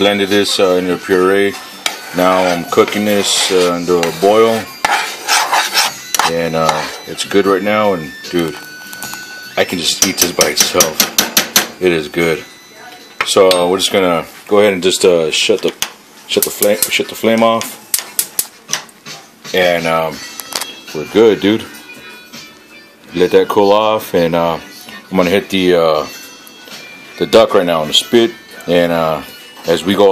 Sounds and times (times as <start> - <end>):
Speech: 0.0 - 1.6, 2.2 - 4.7, 6.3 - 8.6, 9.6 - 11.0, 11.8 - 17.7, 19.5 - 20.2, 23.2 - 26.1, 27.2 - 30.1
Music: 0.0 - 14.4, 16.4 - 30.1.